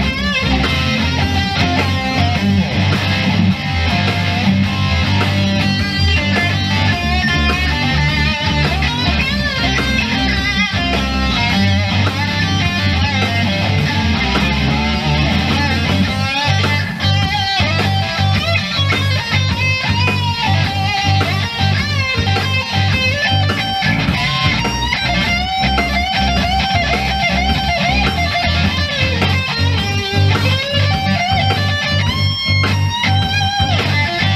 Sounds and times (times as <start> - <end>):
Electric guitar: 0.0 - 34.3.